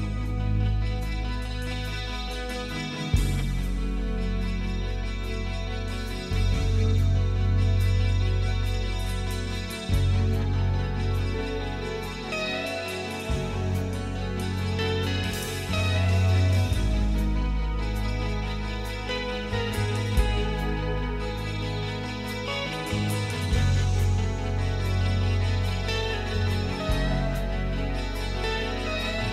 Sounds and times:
Happy music: 0.0 - 29.3.

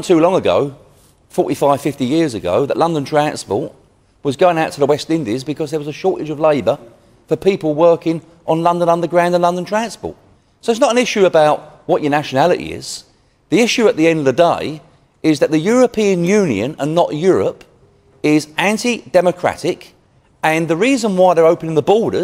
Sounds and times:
Speech: 0.0 - 22.2.

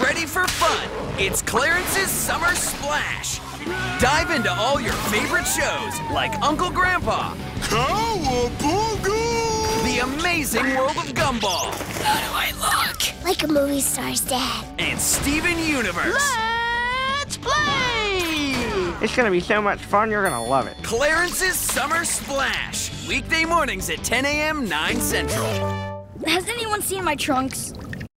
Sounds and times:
Music: 0.0 - 27.7.

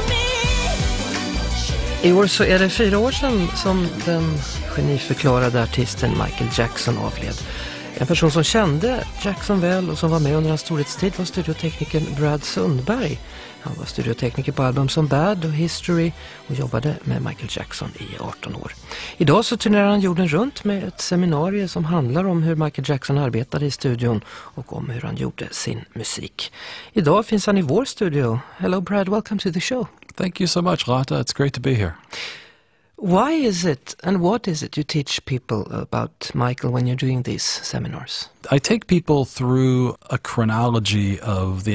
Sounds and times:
Music: 0.0 - 25.0
Speech: 2.0 - 32.1, 33.0 - 41.7.

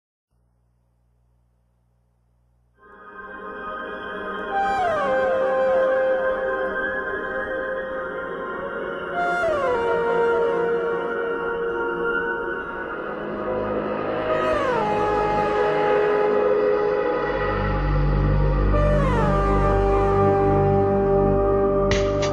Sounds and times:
Music: 2.3 - 22.3.

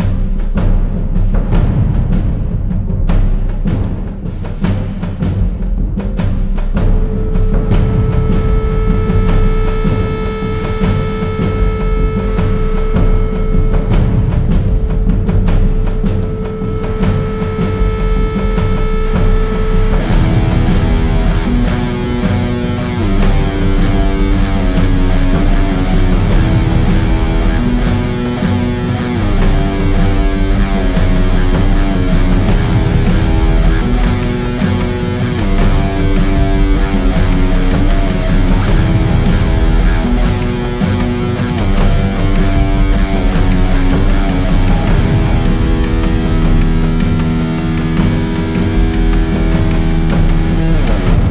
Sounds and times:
Background music: 0.0 - 51.3.

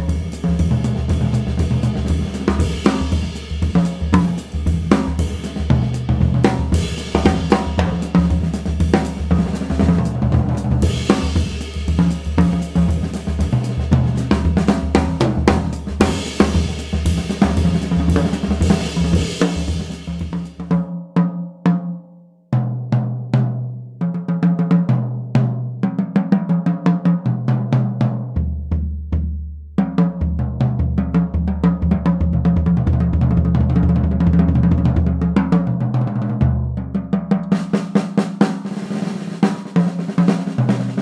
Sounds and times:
Snare drum: 0.0 - 20.9, 37.0 - 41.0.

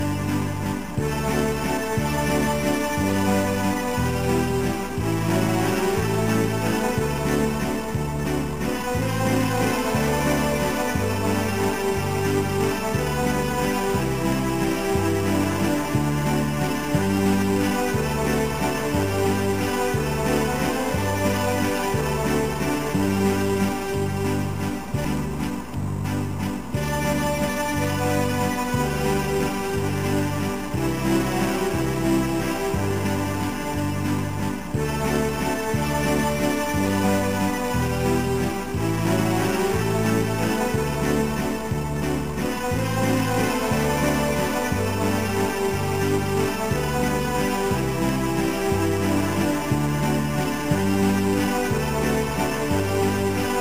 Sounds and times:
Music: 0.0 - 53.6.

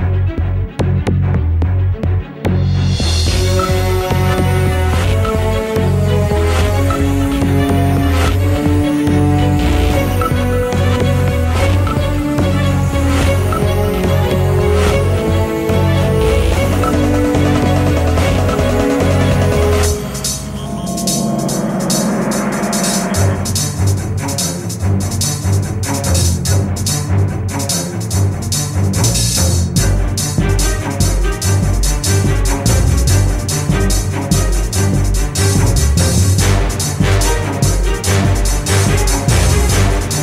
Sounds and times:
Music: 0.0 - 40.2.

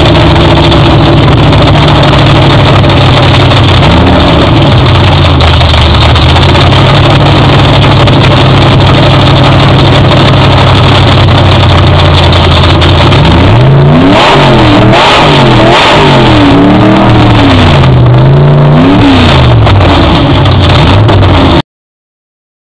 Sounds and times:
Car: 0.0 - 21.6
Accelerating, revving, vroom: 13.2 - 20.2.

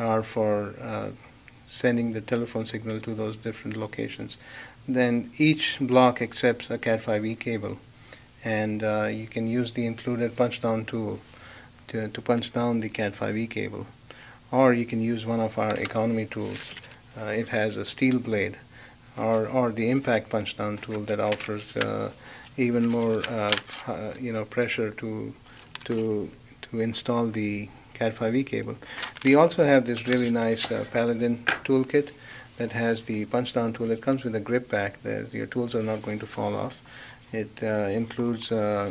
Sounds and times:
Speech: 0.0 - 7.8, 8.4 - 11.3, 11.9 - 38.9.

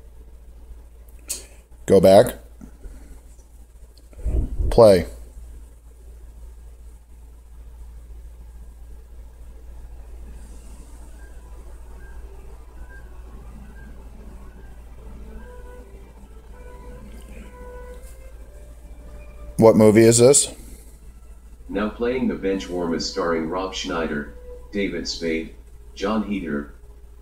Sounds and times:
Speech: 1.9 - 2.4, 4.6 - 5.2, 19.6 - 20.6, 21.7 - 26.7
Music: 7.4 - 27.2.

